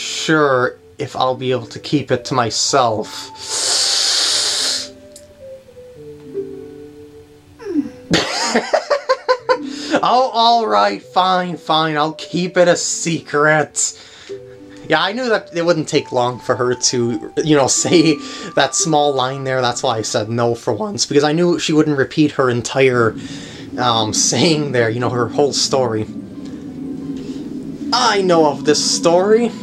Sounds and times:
Speech: 0.0 - 3.3, 10.0 - 14.0, 14.9 - 23.2, 23.8 - 26.1, 28.0 - 29.6
Music: 0.0 - 29.6.

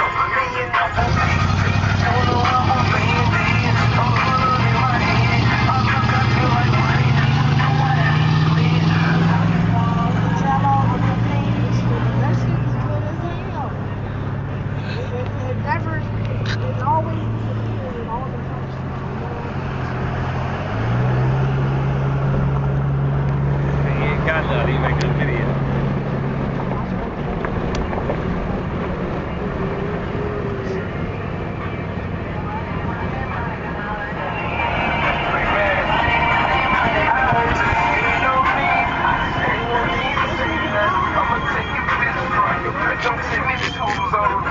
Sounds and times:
Car: 0.0 - 44.5
Outside, urban or manmade: 0.0 - 44.5
Traffic noise, roadway noise: 0.0 - 44.5
Speech: 15.1 - 19.6, 23.9 - 25.5, 40.7 - 44.5.

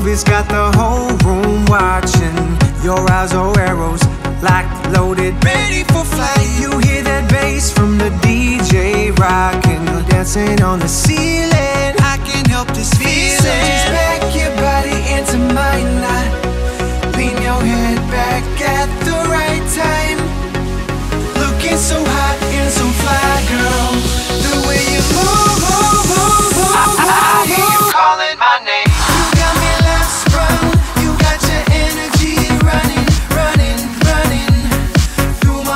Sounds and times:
Music: 0.0 - 35.7.

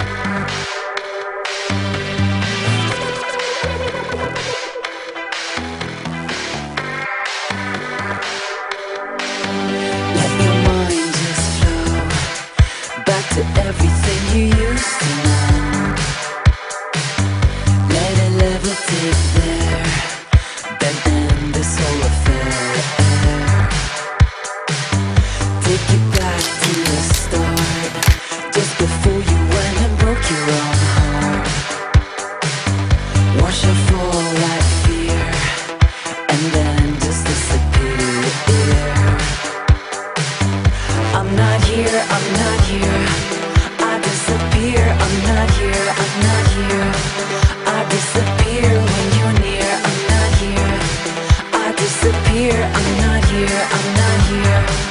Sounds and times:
Music: 0.0 - 54.9.

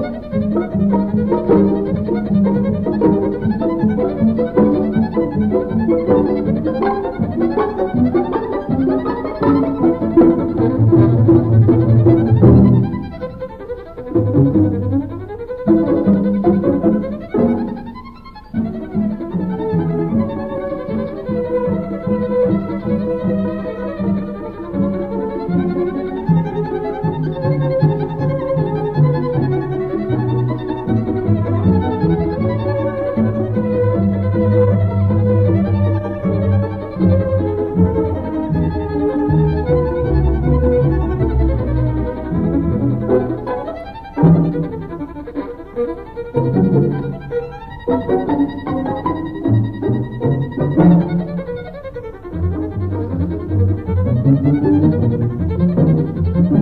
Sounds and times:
Orchestra: 0.0 - 56.6
Violin, fiddle: 0.0 - 56.6.

